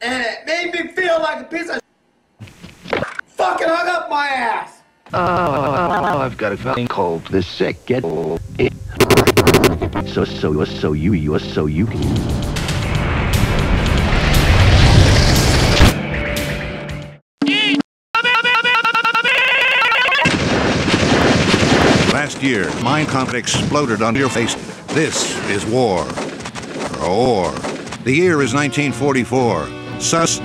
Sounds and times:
Speech: 0:00.0 - 0:01.9, 0:03.4 - 0:08.8, 0:10.0 - 0:12.0, 0:22.2 - 0:26.2, 0:27.0 - 0:30.4
Gunshot, gunfire: 0:20.2 - 0:23.2, 0:25.4 - 0:28.1.

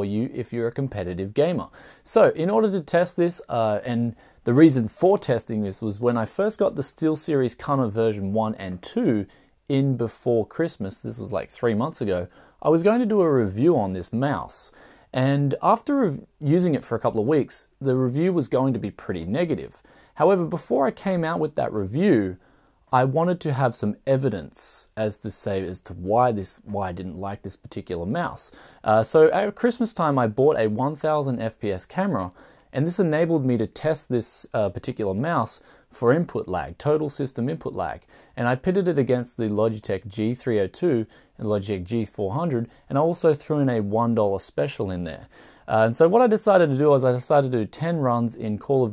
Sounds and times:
Speech: 0:00.0 - 0:48.9.

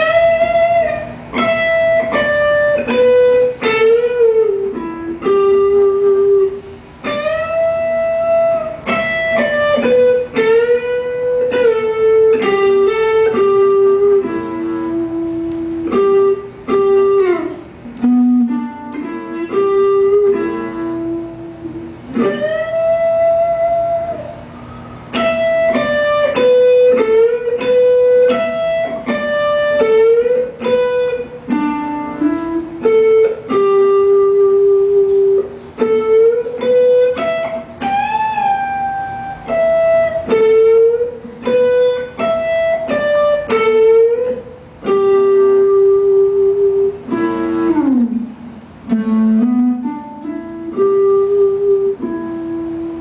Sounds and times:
Guitar: 0:00.0 - 0:53.0.

